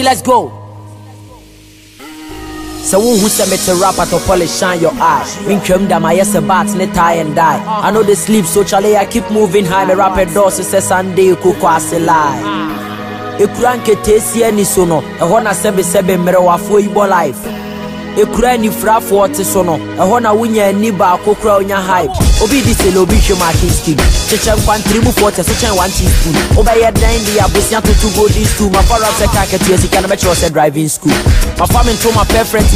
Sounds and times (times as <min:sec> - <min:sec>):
Music: 0:00.0 - 0:32.7.